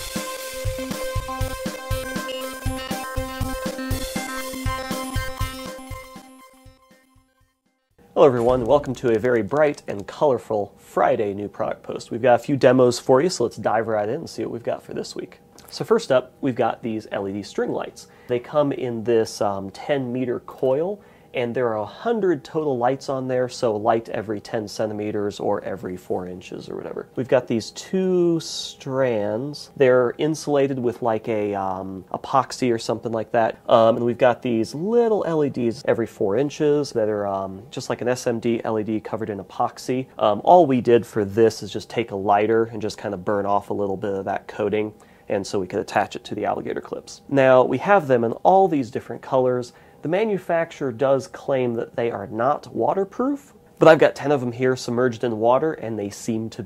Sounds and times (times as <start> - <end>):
Speech: 8.2 - 56.6.